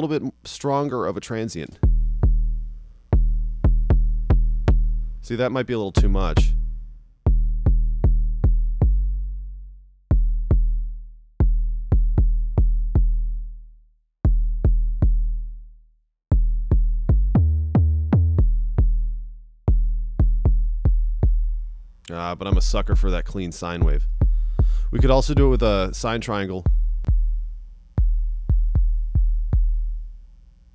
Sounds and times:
Speech: 0:00.0 - 0:01.8, 0:05.2 - 0:06.6, 0:22.1 - 0:24.1, 0:24.9 - 0:26.7.

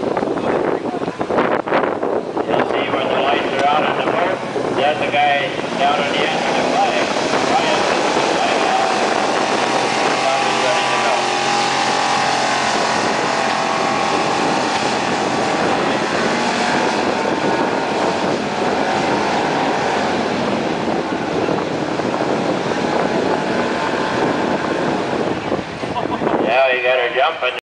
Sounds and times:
Vehicle: 0:00.0 - 0:27.6
Speech: 0:02.4 - 0:09.0, 0:10.2 - 0:11.3, 0:26.0 - 0:27.6.

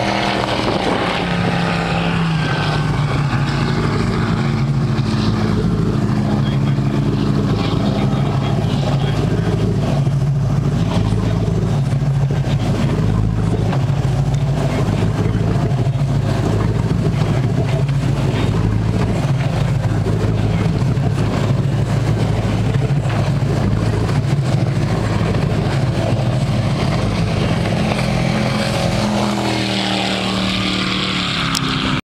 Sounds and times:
Motorboat, speedboat: 0:00.0 - 0:32.0.

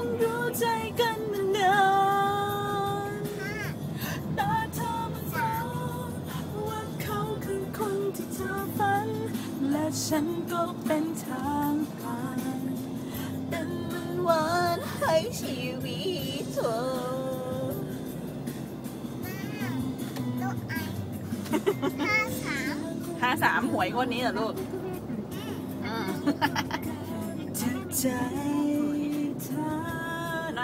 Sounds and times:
Car: 0:00.0 - 0:30.6
Music: 0:00.0 - 0:30.6.

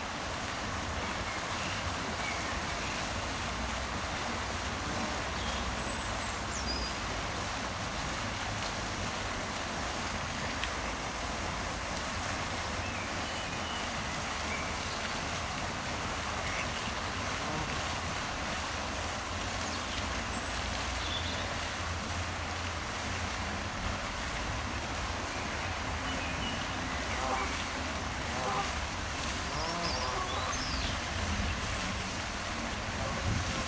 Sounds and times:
Outside, rural or natural: 0:00.0 - 0:33.6.

